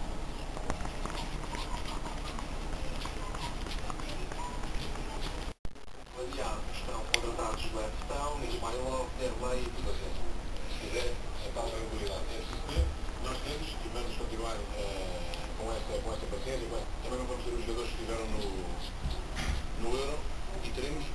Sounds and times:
Speech: 6.1s - 19.0s, 19.8s - 21.1s.

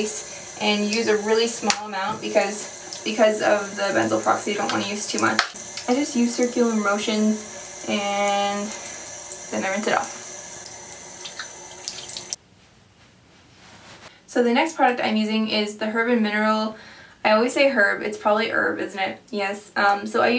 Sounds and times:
Speech: 0.0s - 8.8s, 9.6s - 10.2s, 14.3s - 20.3s
Water tap, faucet: 0.0s - 12.4s
Inside, small room: 0.0s - 20.3s.

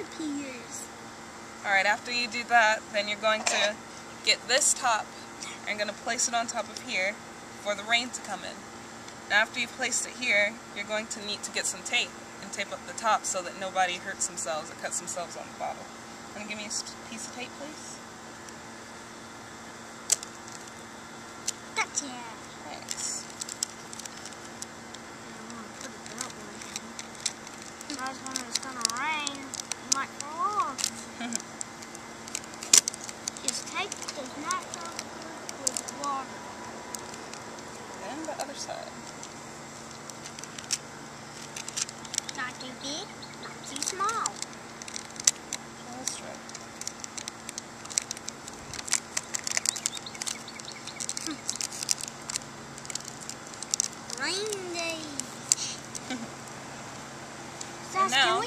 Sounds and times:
Child speech, kid speaking: 0.0s - 0.9s, 21.8s - 23.2s, 27.9s - 31.0s, 33.4s - 36.3s, 42.4s - 44.4s, 54.1s - 55.8s, 57.8s - 58.4s
Crackle: 19.9s - 56.6s.

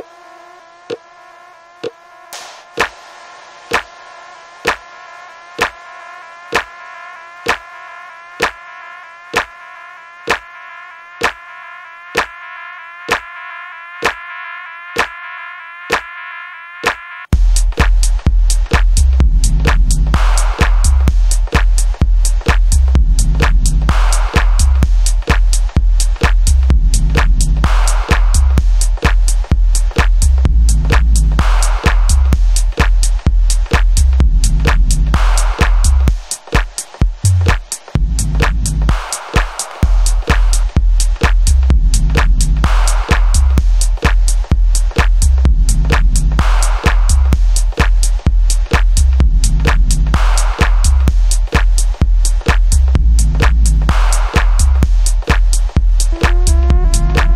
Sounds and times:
Music: 17.3s - 57.3s.

